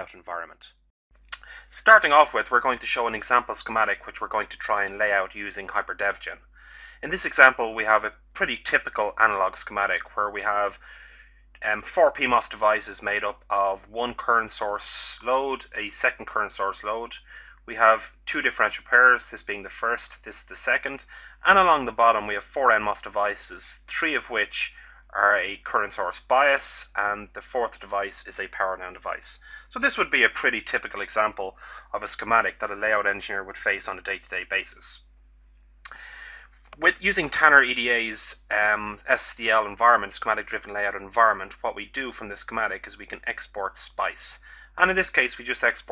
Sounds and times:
Speech: 0.0s - 0.8s, 1.4s - 10.8s, 11.6s - 35.0s, 36.7s - 45.9s.

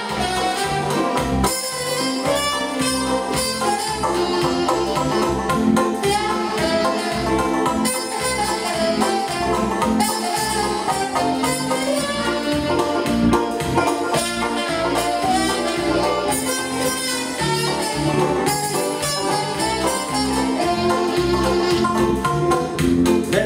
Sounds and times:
Bluegrass: 0.0s - 23.4s.

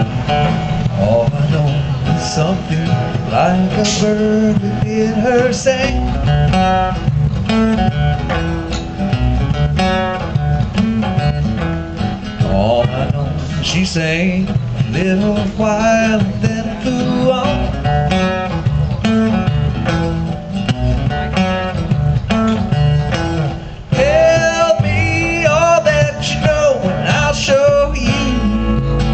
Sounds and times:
Music: 0.0s - 29.1s.

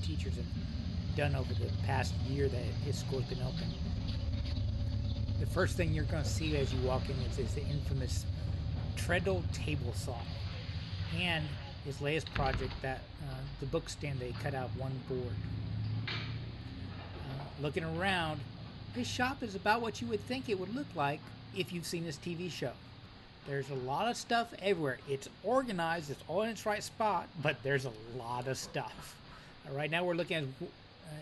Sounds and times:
Speech: 0.0s - 0.5s, 1.2s - 3.7s, 5.4s - 8.3s, 9.0s - 10.5s, 11.1s - 15.4s, 17.2s - 18.4s, 19.0s - 22.8s, 23.5s - 31.2s.

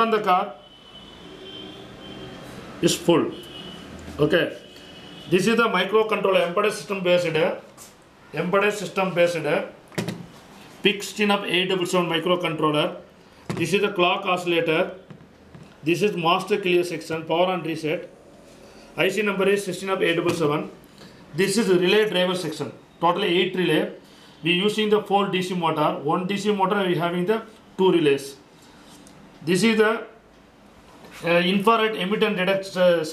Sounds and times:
Speech: 0.0s - 0.6s, 2.8s - 3.4s, 4.2s - 4.6s, 5.3s - 7.7s, 8.3s - 9.8s, 10.8s - 15.0s, 15.8s - 18.1s, 19.0s - 20.8s, 21.4s - 28.4s, 29.4s - 30.2s, 31.2s - 33.1s.

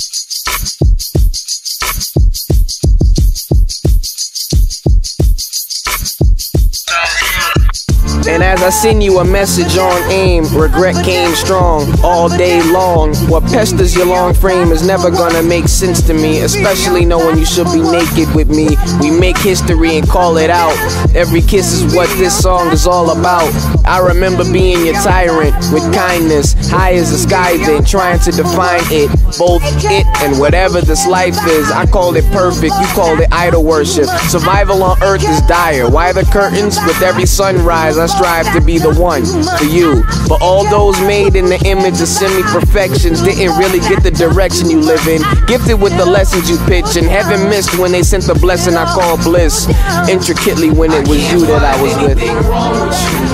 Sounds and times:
Musical instrument: 6.9s - 33.8s, 50.0s - 53.3s.

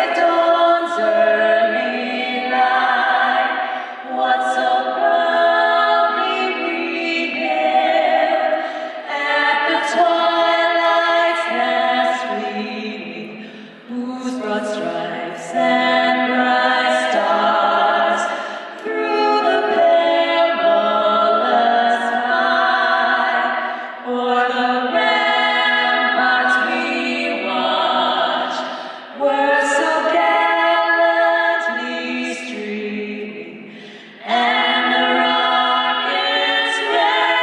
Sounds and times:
Female singing: 0.0s - 37.4s.

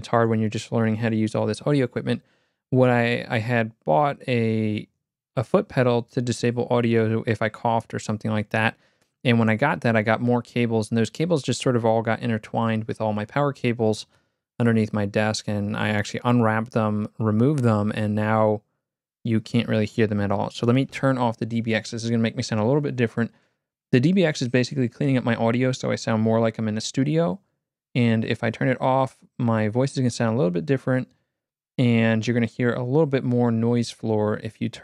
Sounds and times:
Speech: 0.0s - 18.6s, 19.2s - 23.4s, 24.0s - 27.4s, 28.0s - 31.1s, 31.8s - 34.8s.

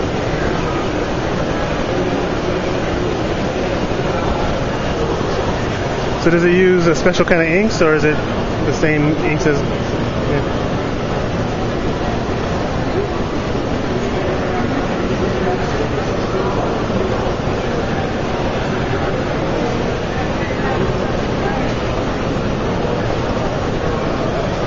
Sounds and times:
Speech: 6.2s - 9.7s.

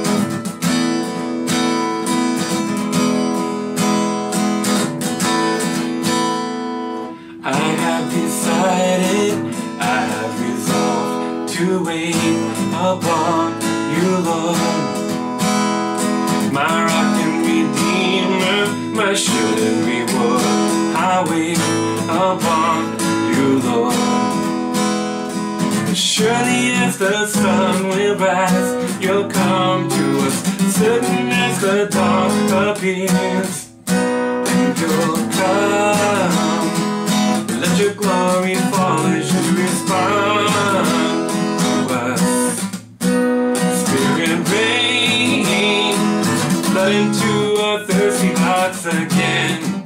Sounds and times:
Guitar: 0.0s - 49.8s.

